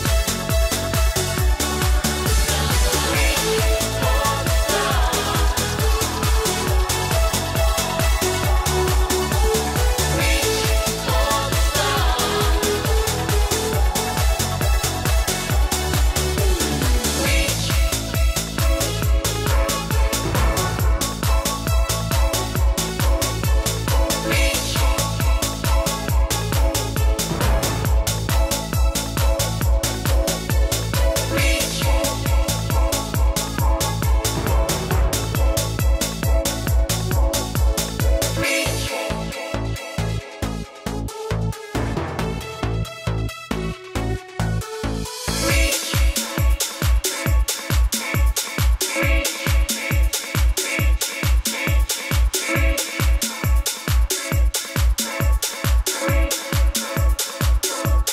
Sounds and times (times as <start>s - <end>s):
Disco: 0.0s - 58.1s.